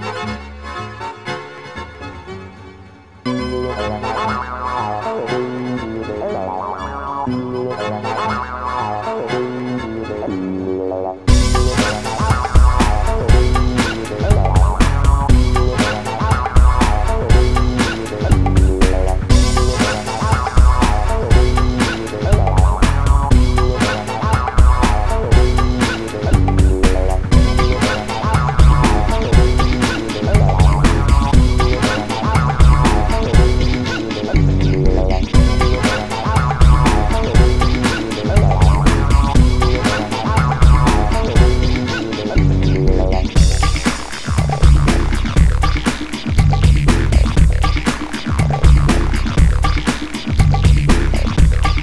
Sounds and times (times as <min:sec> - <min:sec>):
Theme music: 0:00.0 - 0:46.3.